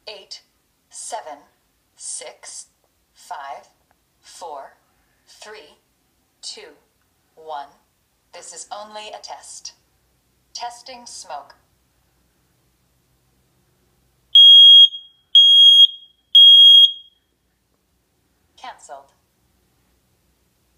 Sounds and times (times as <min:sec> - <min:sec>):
Speech: 0:00.0 - 0:05.8, 0:06.4 - 0:09.8, 0:10.6 - 0:11.7, 0:18.6 - 0:19.2
Fire alarm: 0:14.4 - 0:17.3
Smoke detector, smoke alarm: 0:14.4 - 0:17.4.